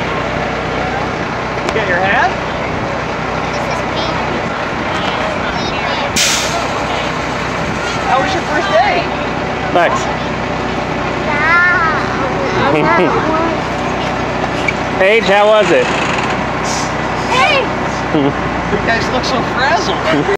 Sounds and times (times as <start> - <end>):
Bus: 0.0 - 20.3.